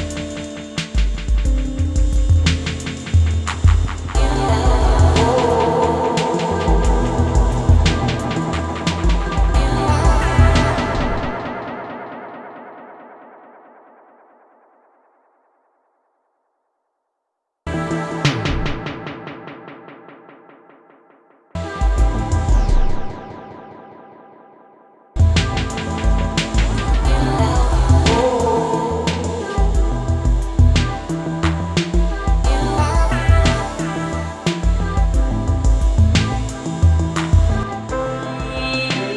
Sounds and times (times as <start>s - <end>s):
Music: 0.0s - 14.1s, 17.7s - 39.1s
Echo: 4.1s - 15.7s.